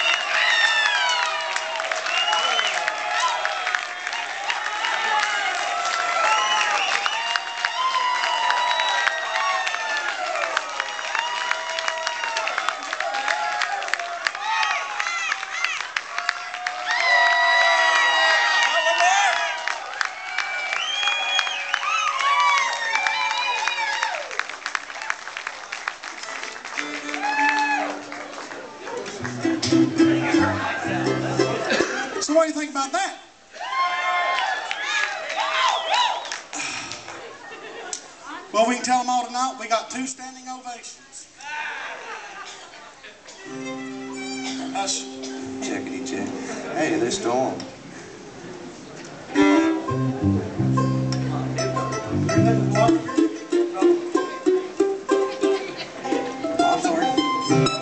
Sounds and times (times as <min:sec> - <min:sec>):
Music: 0:26.8 - 0:28.2, 0:29.2 - 0:31.7, 0:43.5 - 0:46.4, 0:49.4 - 0:57.8.